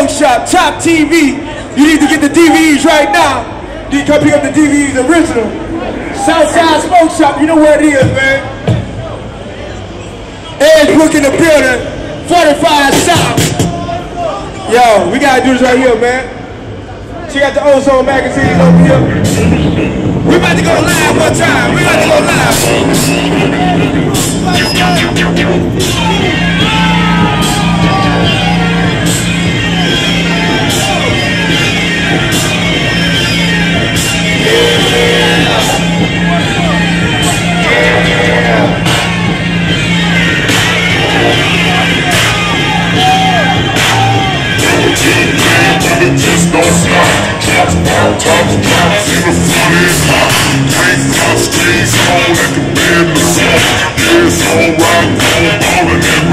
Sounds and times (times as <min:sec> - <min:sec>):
Speech: 0:00.0 - 0:09.8, 0:10.4 - 0:16.4, 0:17.1 - 0:19.5
Music: 0:07.6 - 0:09.1, 0:12.9 - 0:13.8, 0:18.4 - 0:56.3.